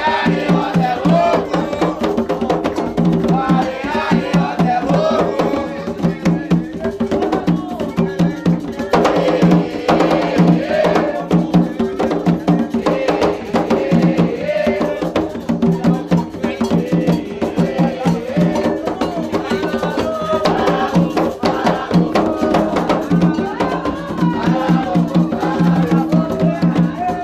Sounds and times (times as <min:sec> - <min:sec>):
Music: 0:00.0 - 0:27.2.